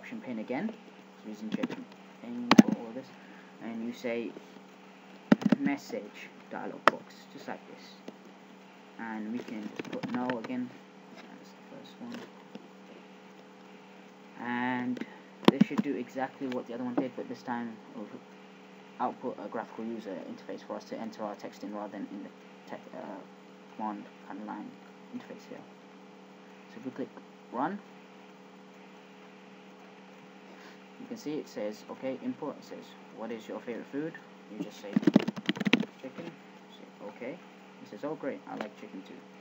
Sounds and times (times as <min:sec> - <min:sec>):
Speech: 0:00.0 - 0:04.4, 0:05.5 - 0:08.0, 0:09.0 - 0:12.3, 0:14.4 - 0:18.2, 0:19.0 - 0:25.7, 0:26.7 - 0:27.9, 0:31.0 - 0:35.2, 0:35.8 - 0:39.3.